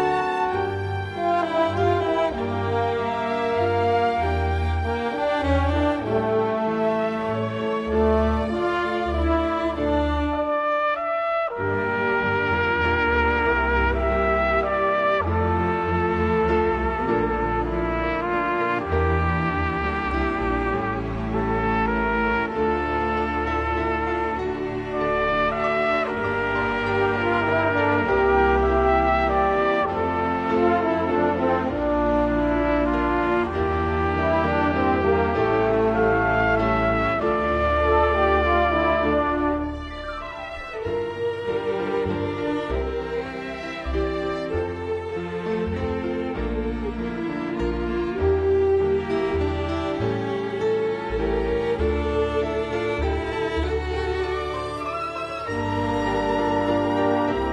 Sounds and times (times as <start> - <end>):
Bowed string instrument: 0.0 - 57.5
Classical music: 0.0 - 57.5
Orchestra: 0.0 - 57.5.